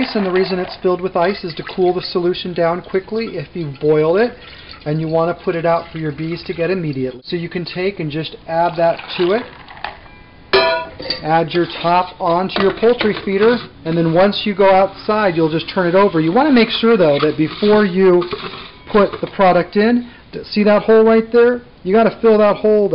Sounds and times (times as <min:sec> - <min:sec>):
Speech: 0:00.0 - 0:09.5, 0:11.2 - 0:18.3, 0:18.9 - 0:22.9.